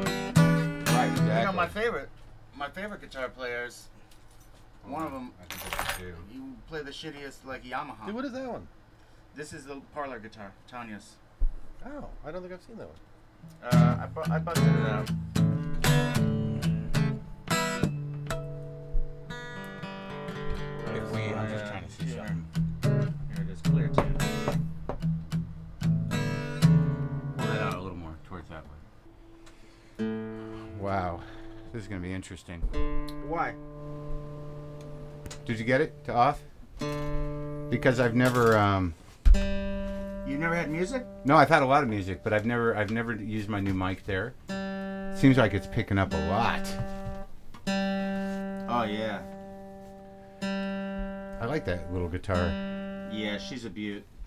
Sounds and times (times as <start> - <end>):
Strum: 0.0 - 1.9, 13.5 - 31.8, 32.7 - 54.2
Speech: 0.9 - 3.9, 4.8 - 8.7, 9.4 - 11.2, 11.8 - 13.0, 13.6 - 15.1, 20.8 - 22.4, 27.5 - 28.8, 30.8 - 33.6, 35.5 - 36.4, 37.7 - 39.0, 40.3 - 44.4, 45.2 - 46.8, 48.7 - 49.3, 51.4 - 54.0.